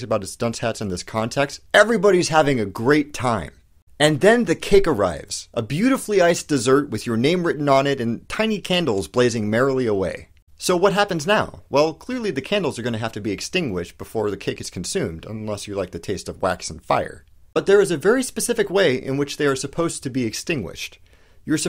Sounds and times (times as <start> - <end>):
Speech: 0.0 - 21.6.